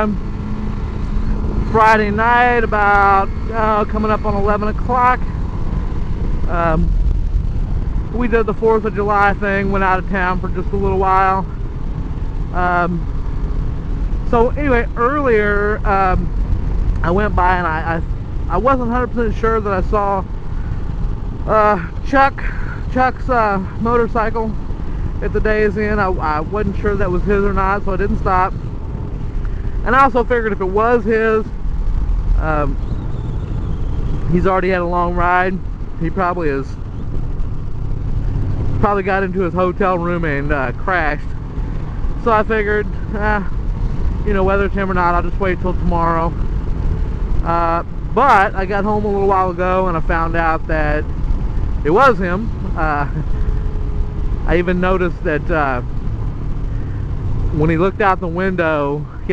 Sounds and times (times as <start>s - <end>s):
Speech: 0.0s - 0.2s, 1.7s - 5.2s, 6.5s - 6.9s, 8.1s - 11.5s, 12.5s - 13.0s, 14.3s - 16.3s, 17.0s - 20.3s, 21.5s - 24.6s, 25.2s - 28.6s, 29.8s - 31.5s, 32.4s - 32.8s, 34.3s - 36.8s, 38.8s - 41.3s, 42.2s - 43.6s, 44.2s - 46.4s, 47.4s - 51.1s, 51.9s - 53.2s, 54.5s - 55.9s, 57.5s - 59.3s
Motorcycle: 0.0s - 59.3s.